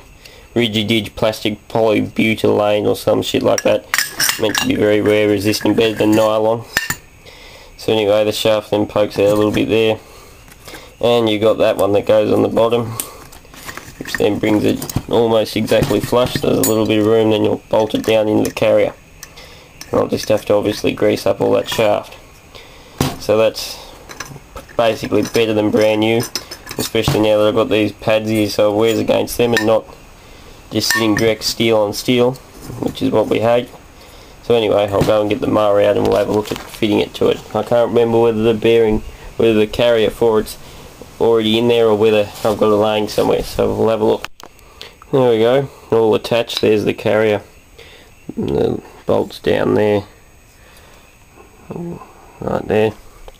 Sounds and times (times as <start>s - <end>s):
Speech: 0.6s - 6.7s, 7.8s - 10.0s, 11.0s - 13.0s, 14.1s - 19.0s, 19.9s - 22.2s, 23.2s - 23.9s, 24.8s - 29.9s, 30.7s - 33.8s, 34.4s - 40.6s, 41.2s - 44.3s, 45.1s - 47.5s, 48.3s - 50.2s, 51.7s - 53.0s.